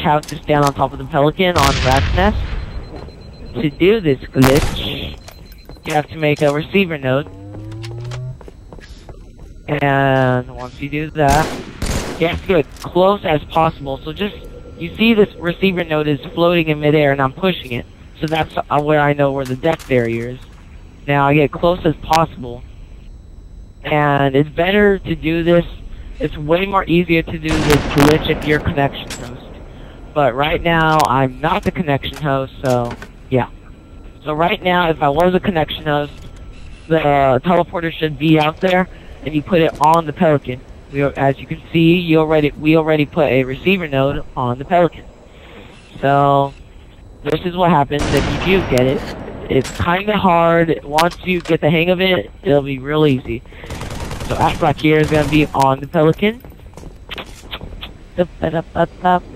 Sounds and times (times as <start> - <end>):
Speech: 0.0 - 2.5, 3.5 - 5.2, 5.8 - 7.3, 9.7 - 11.6, 12.2 - 20.4, 21.1 - 22.6, 23.8 - 29.5, 30.2 - 33.5, 34.2 - 36.2, 36.9 - 45.0, 46.0 - 46.6, 47.2 - 53.4, 54.2 - 56.4, 58.2 - 59.3.